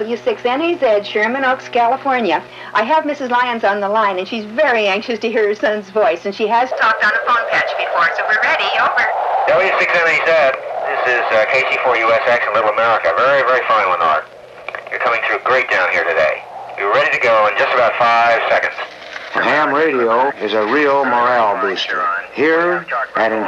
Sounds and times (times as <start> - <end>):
Speech: 0.0 - 14.3, 14.9 - 23.4
Radio: 0.0 - 23.4.